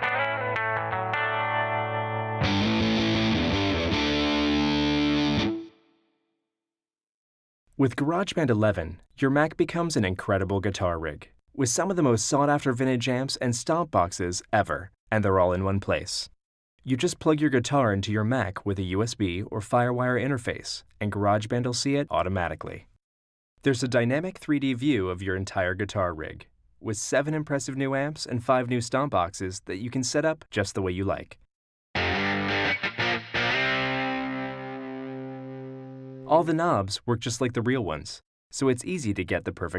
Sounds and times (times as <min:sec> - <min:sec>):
Speech: 0:07.8 - 0:22.9, 0:23.6 - 0:31.5, 0:36.3 - 0:39.7.